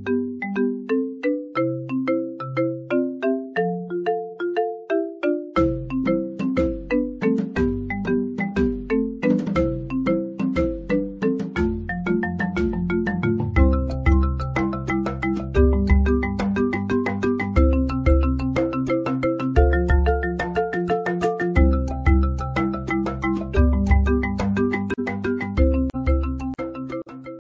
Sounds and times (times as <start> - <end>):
Music: 0.0 - 27.4.